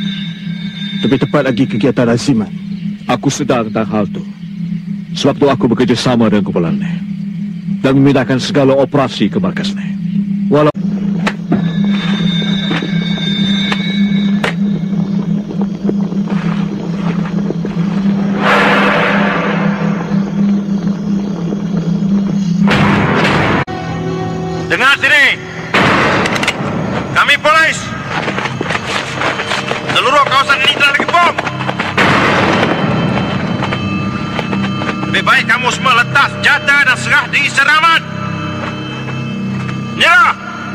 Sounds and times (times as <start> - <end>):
Music: 0.0 - 3.1, 10.0 - 40.7
Outside, rural or natural: 0.0 - 40.7
Speech: 5.2 - 7.0, 7.8 - 10.8.